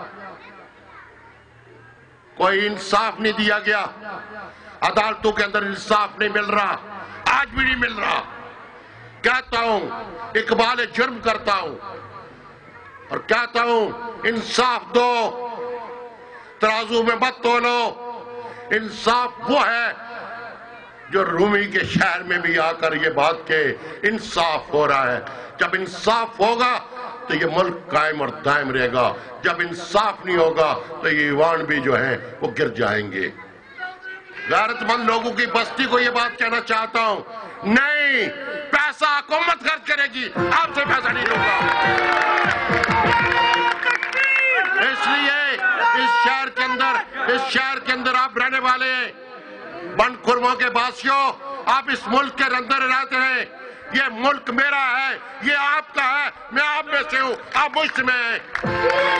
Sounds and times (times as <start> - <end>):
Male speech, man speaking: 2.4 - 8.4, 9.2 - 11.9, 13.1 - 15.4, 16.6 - 18.0, 18.7 - 20.1, 21.1 - 41.6, 43.8 - 58.5
Narration, monologue: 2.4 - 41.6, 44.2 - 58.7.